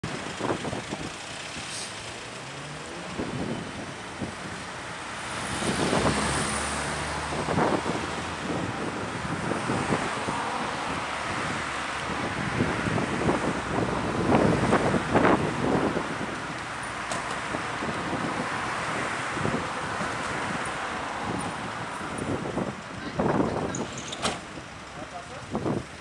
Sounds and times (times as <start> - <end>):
Car: 0.0 - 26.0.